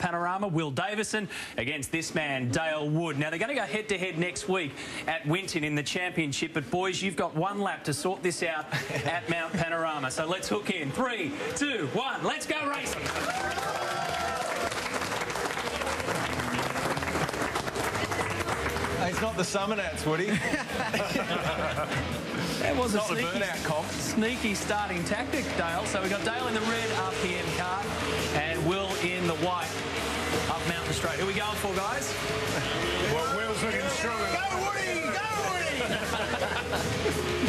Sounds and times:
Music: 3.0s - 37.4s.

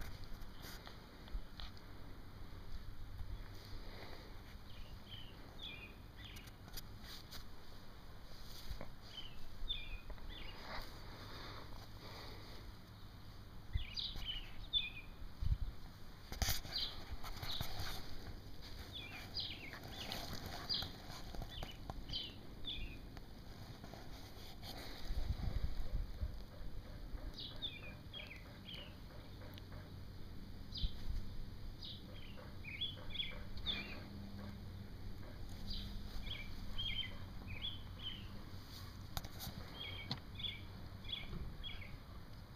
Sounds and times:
Outside, rural or natural: 0.0s - 42.5s
Bird: 13.8s - 15.2s, 16.6s - 18.1s, 18.7s - 23.0s, 23.8s - 30.0s, 31.8s - 34.6s, 35.2s - 38.4s, 39.3s - 42.2s.

